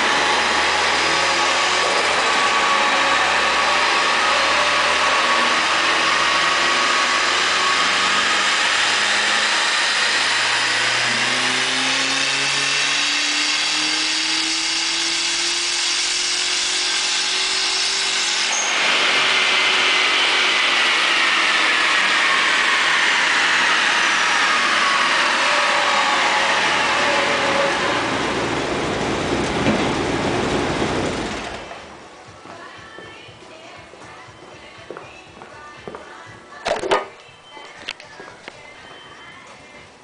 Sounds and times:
Car: 0.0s - 32.3s.

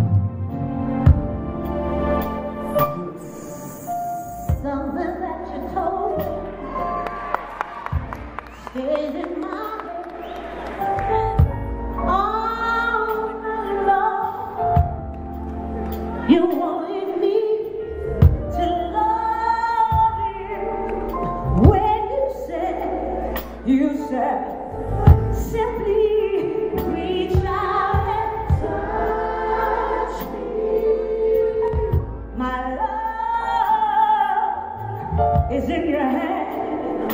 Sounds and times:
Tender music: 0.0s - 37.1s.

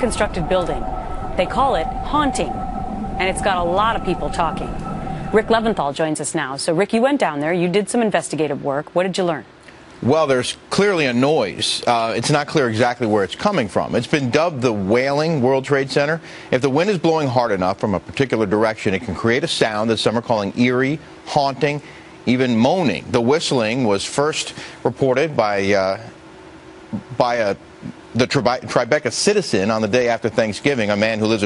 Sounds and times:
Speech: 10.0s - 26.2s, 27.0s - 27.6s, 28.2s - 31.4s.

